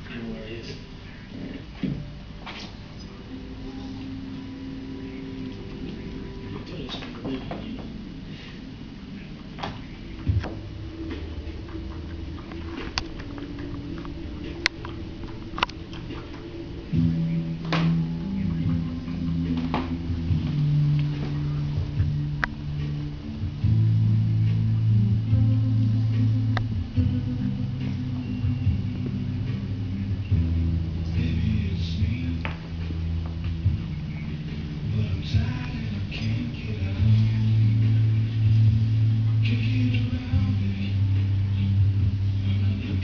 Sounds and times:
Music: 0:00.0 - 0:43.0.

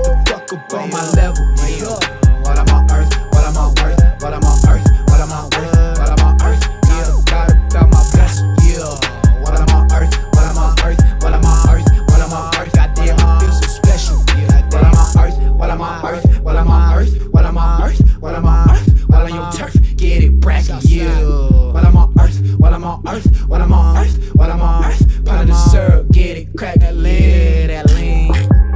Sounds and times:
Independent music: 0:00.0 - 0:28.7
Pop music: 0:00.0 - 0:28.7
Rhythm and blues: 0:00.0 - 0:28.7.

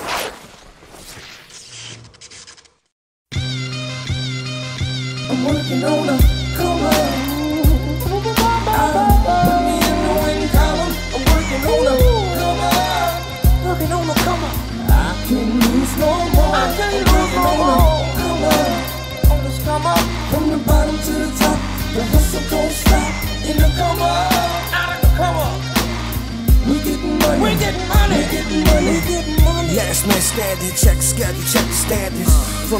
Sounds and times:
Independent music: 0:03.4 - 0:32.8
Pop music: 0:05.2 - 0:32.8.

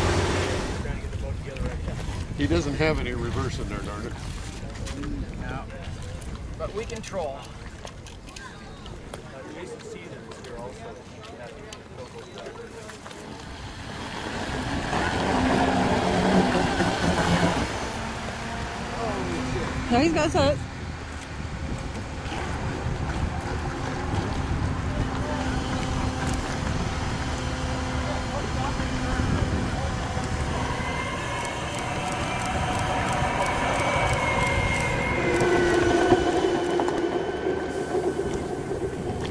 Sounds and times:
Motorboat, speedboat: 0:00.0 - 0:39.3.

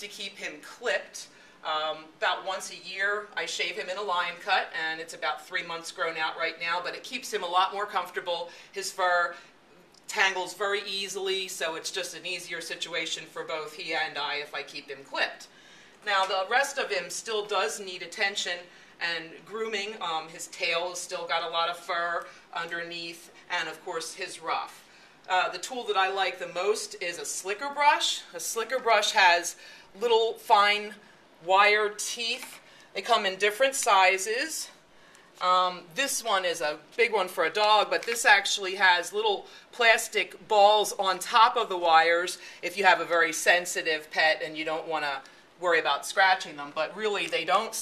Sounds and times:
Speech: 0:00.0 - 0:34.8, 0:35.4 - 0:47.8.

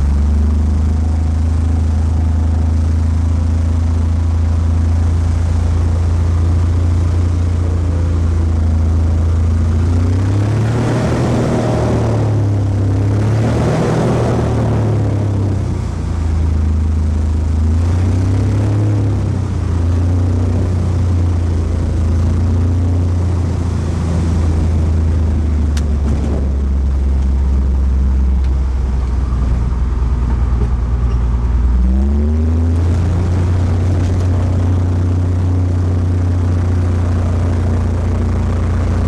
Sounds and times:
Outside, rural or natural: 0:00.0 - 0:39.0
Vehicle: 0:00.0 - 0:39.0.

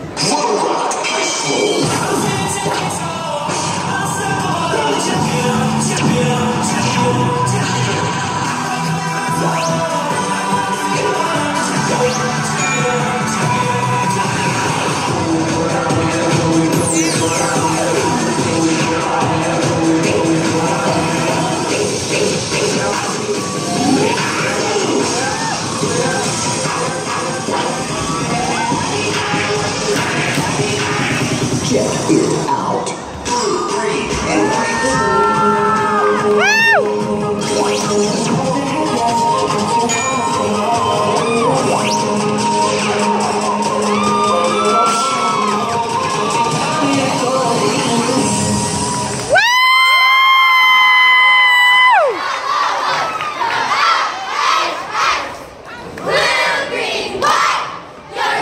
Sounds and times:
Crowd: 0:00.0 - 0:58.4
Cheering: 0:23.2 - 0:29.4, 0:34.2 - 0:36.9, 0:43.1 - 0:55.3
Children shouting: 0:51.7 - 0:58.4.

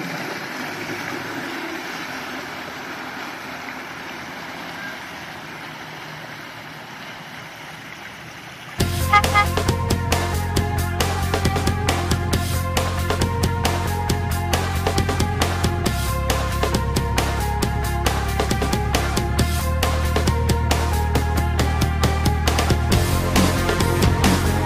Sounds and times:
Motorboat, speedboat: 0:00.0 - 0:24.6
Music: 0:08.8 - 0:24.6.

